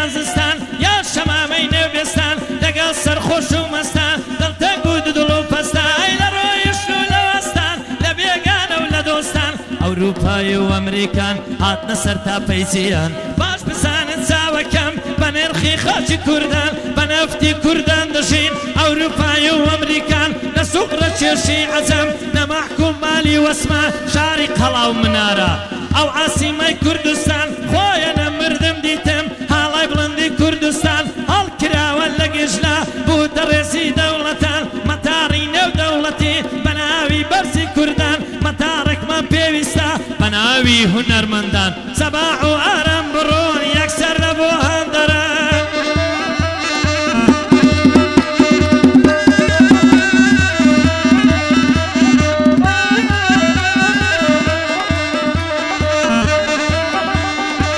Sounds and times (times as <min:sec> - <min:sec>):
Drum: 0:00.0 - 0:57.7.